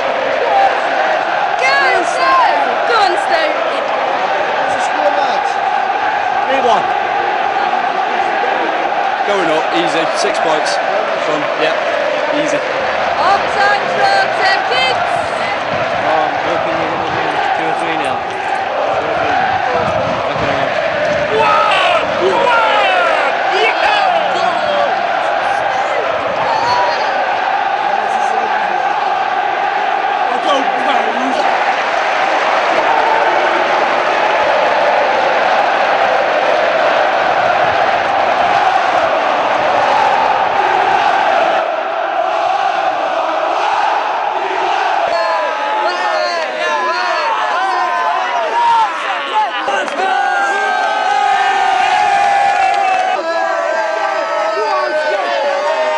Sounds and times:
Crowd: 0.0s - 55.9s.

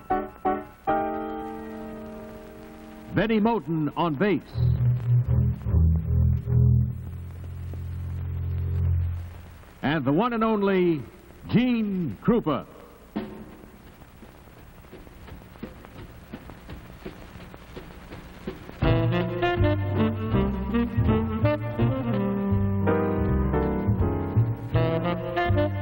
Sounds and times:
Music: 0.0s - 9.4s, 13.1s - 14.0s, 18.3s - 25.8s.

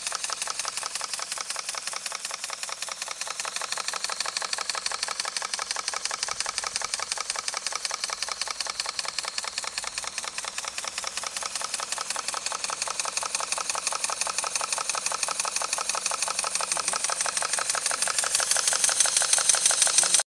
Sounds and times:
Heavy engine (low frequency): 0.0s - 20.2s.

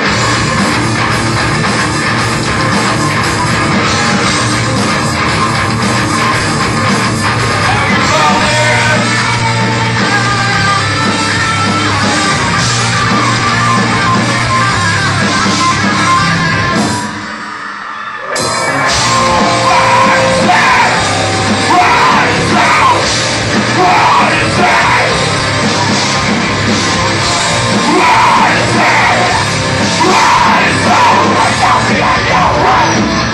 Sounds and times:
Inside, large room or hall: 0.0s - 33.3s
Music: 0.0s - 33.3s.

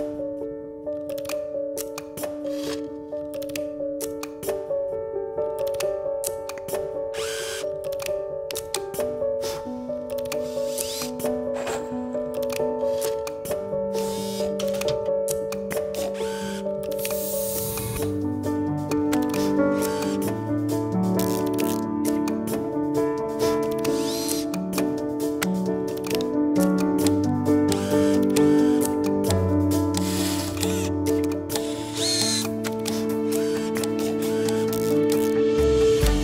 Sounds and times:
Music: 0.0s - 36.2s
Tools: 10.2s - 13.4s.

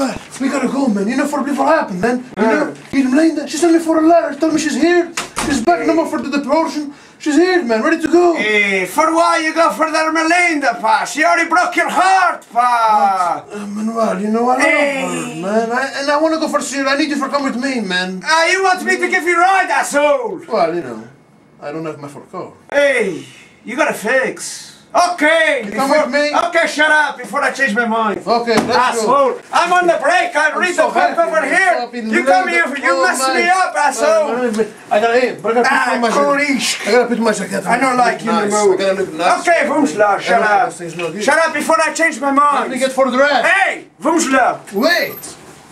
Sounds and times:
Speech: 0.0s - 45.4s.

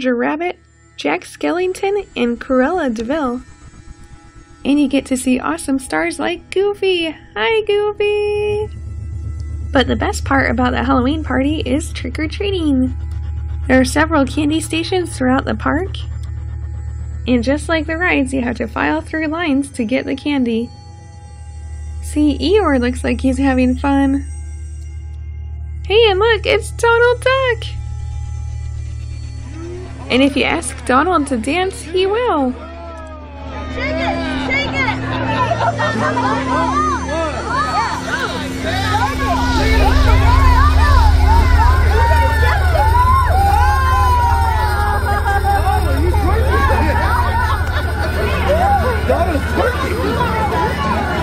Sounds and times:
Speech: 0.0s - 3.4s, 4.7s - 8.7s, 9.8s - 13.0s, 13.7s - 16.1s, 17.3s - 20.7s, 22.1s - 24.2s, 25.9s - 27.8s, 29.7s - 33.0s
Music: 0.0s - 51.2s.

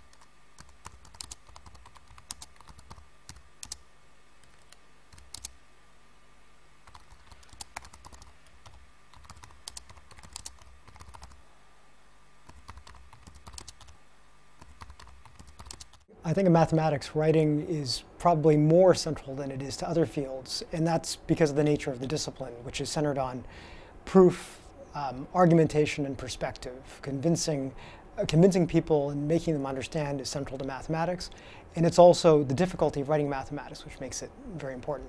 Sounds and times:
Speech: 16.2s - 23.5s, 24.1s - 35.0s.

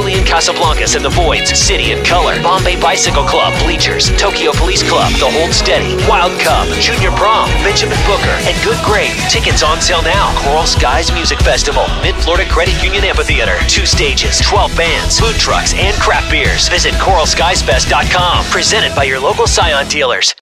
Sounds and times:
Music: 0.0s - 20.4s
Speech: 0.0s - 20.4s.

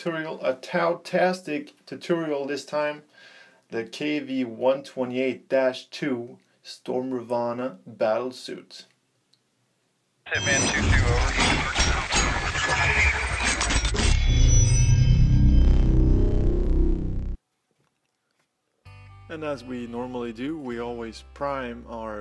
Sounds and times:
Speech: 0.0s - 3.0s, 3.7s - 8.9s, 10.3s - 13.5s, 19.3s - 22.2s
Inside, small room: 0.0s - 22.2s.

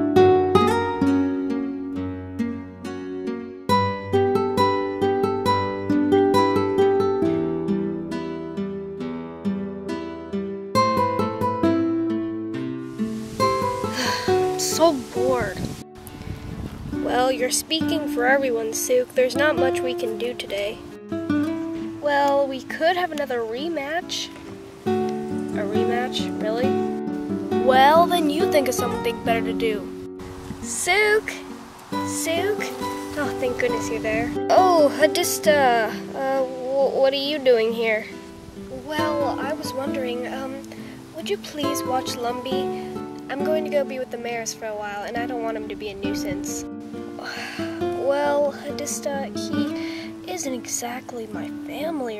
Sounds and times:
Music: 0.0s - 52.1s
Speech: 17.1s - 20.8s, 22.0s - 24.3s, 25.6s - 26.7s, 27.6s - 29.8s, 30.7s - 31.4s, 32.1s - 38.1s, 38.7s - 40.6s, 41.2s - 42.6s, 43.3s - 46.6s, 48.0s - 52.1s.

